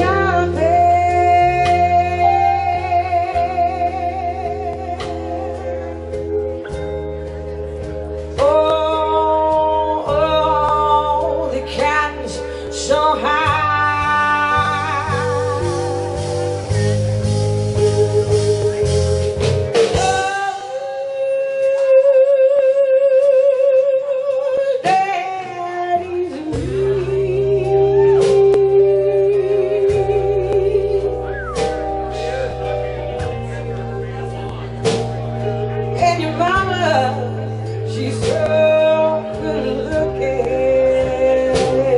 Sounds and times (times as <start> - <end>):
Female singing: 0.0 - 5.7, 8.4 - 16.1, 20.0 - 31.3, 36.0 - 41.9
Music: 0.0 - 41.9.